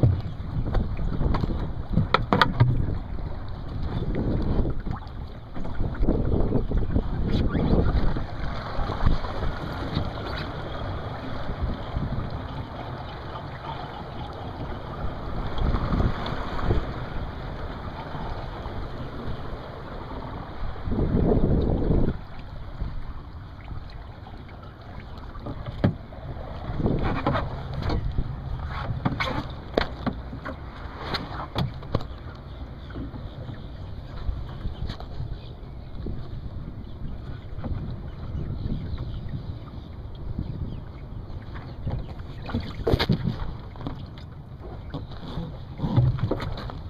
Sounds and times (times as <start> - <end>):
Sailboat, sailing ship: 0.0 - 46.8.